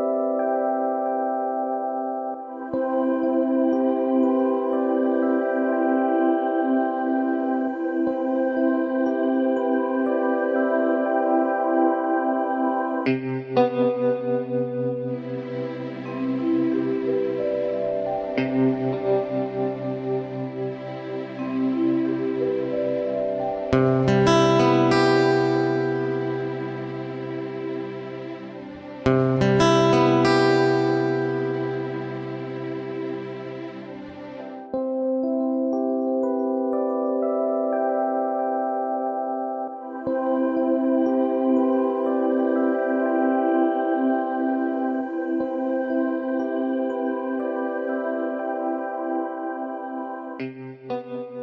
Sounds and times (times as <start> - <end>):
New-age music: 0.0 - 51.4.